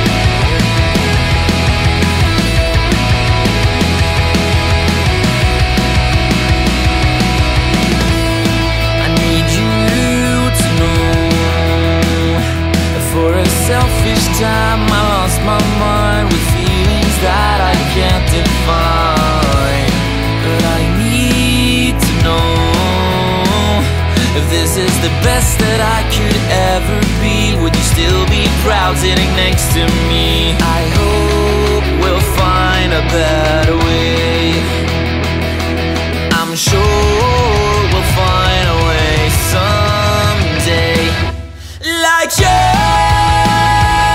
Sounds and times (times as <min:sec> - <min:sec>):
Music: 0:00.0 - 0:44.1.